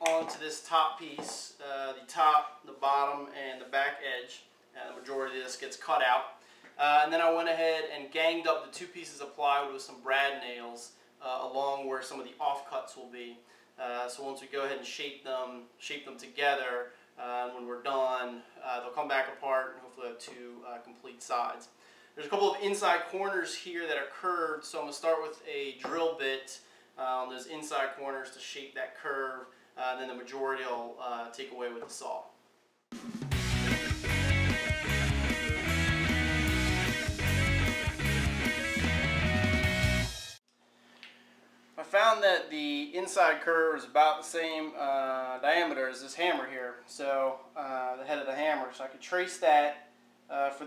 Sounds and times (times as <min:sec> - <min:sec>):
Speech: 0:00.0 - 0:32.4, 0:41.8 - 0:50.6
Inside, small room: 0:00.0 - 0:50.6
Music: 0:32.9 - 0:40.4.